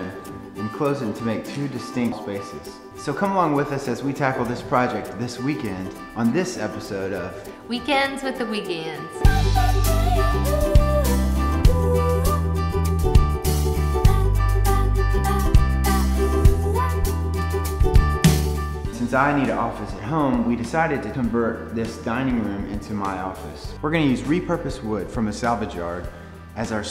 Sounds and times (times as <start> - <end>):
Music: 0.0 - 26.9
Speech: 0.6 - 9.1, 19.0 - 26.9.